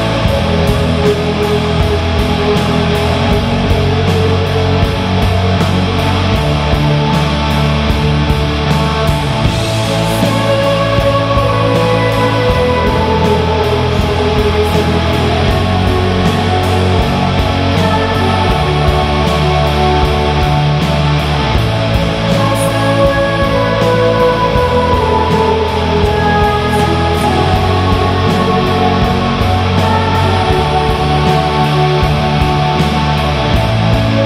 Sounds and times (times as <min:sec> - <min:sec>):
Bass drum: 0:00.0 - 0:34.2
Drum kit: 0:00.0 - 0:34.2.